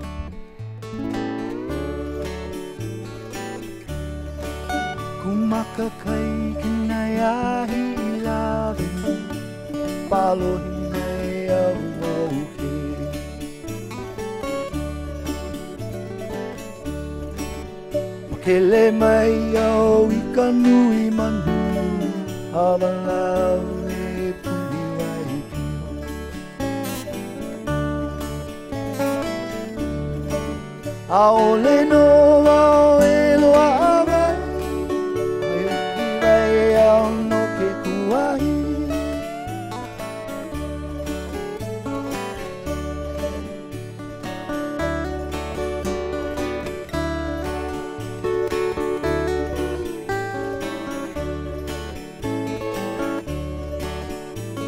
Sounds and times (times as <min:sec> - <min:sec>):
Music: 0:00.0 - 0:54.6.